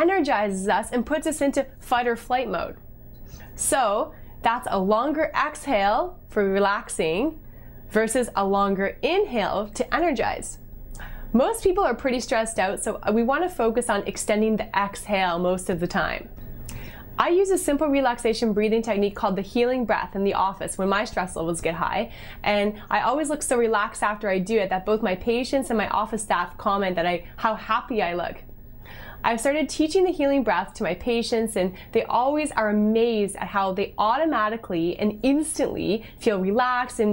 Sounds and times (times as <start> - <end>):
Female speech, woman speaking: 0.0 - 2.8, 3.6 - 10.6, 11.4 - 16.3, 17.2 - 28.4, 29.2 - 37.1.